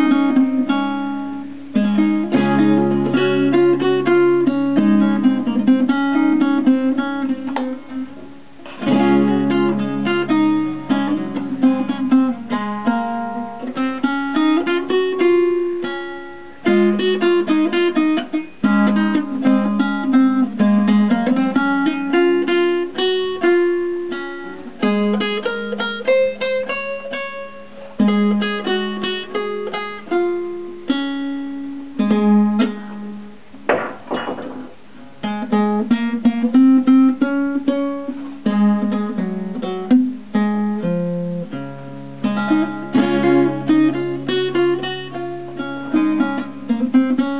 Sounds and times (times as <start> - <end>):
Acoustic guitar: 0.0 - 47.3
Strum: 0.0 - 47.3.